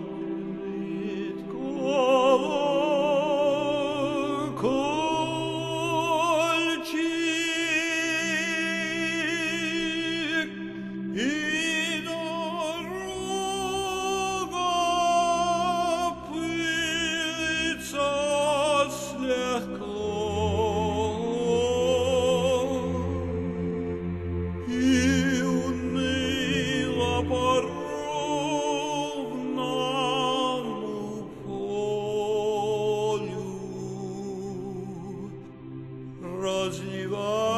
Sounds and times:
Music: 0:00.0 - 0:37.5.

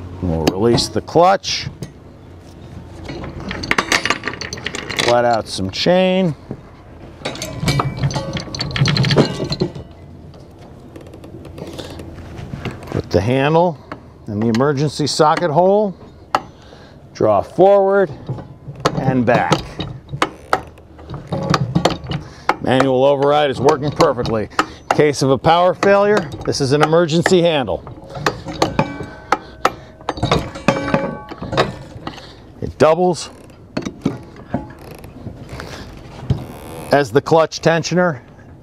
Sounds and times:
Speech: 0:00.2 - 0:01.8, 0:05.0 - 0:06.4, 0:13.0 - 0:16.0, 0:17.2 - 0:18.2, 0:19.0 - 0:19.8, 0:22.6 - 0:27.8, 0:32.6 - 0:33.4, 0:36.9 - 0:38.2.

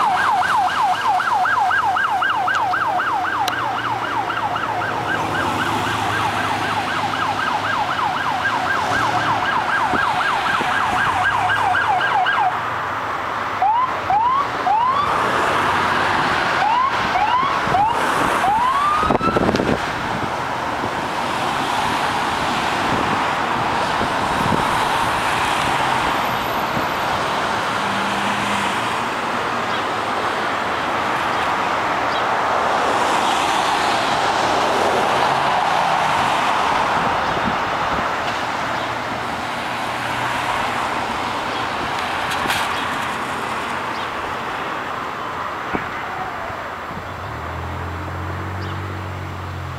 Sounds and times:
Car passing by: 0:21.2 - 0:29.1, 0:32.1 - 0:44.0.

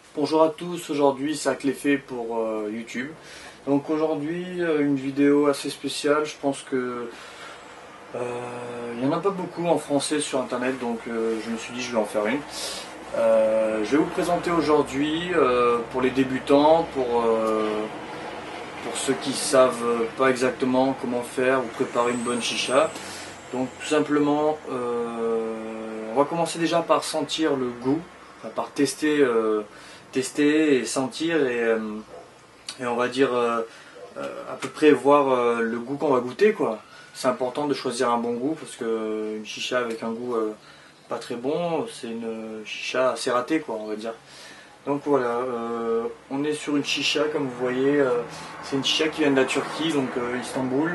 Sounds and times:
Speech: 0:00.1 - 0:07.2, 0:08.1 - 0:18.0, 0:18.8 - 0:32.1, 0:32.7 - 0:44.2, 0:44.9 - 0:50.9.

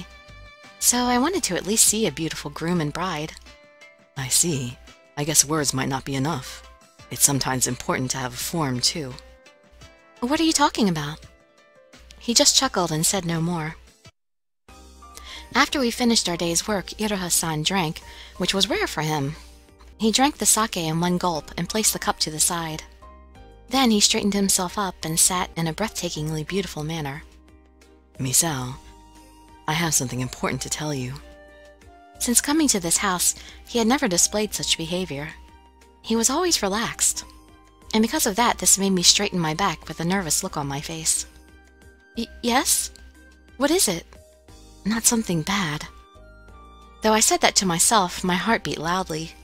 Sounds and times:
Music: 0:00.0 - 0:49.4
Narration, monologue: 0:00.0 - 0:49.4.

